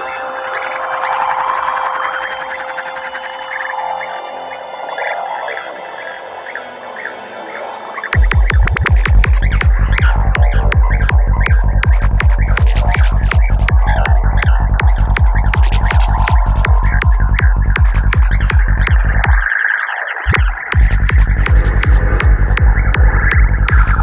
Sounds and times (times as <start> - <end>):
Electronic music: 0.0 - 24.0.